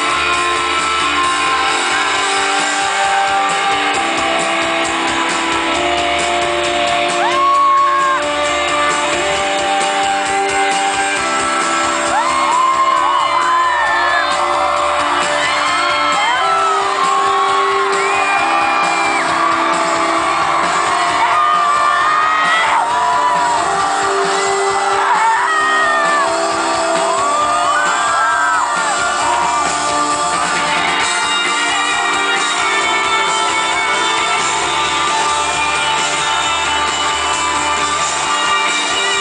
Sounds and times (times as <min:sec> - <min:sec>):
Dance music: 0:00.0 - 0:39.2.